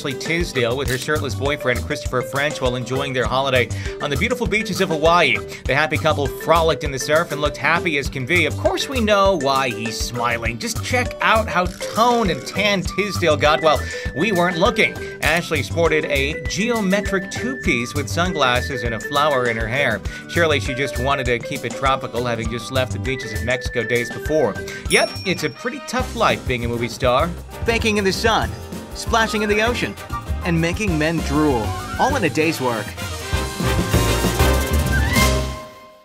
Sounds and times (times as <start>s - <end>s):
Speech: 0.0s - 33.0s
Music: 0.0s - 36.0s.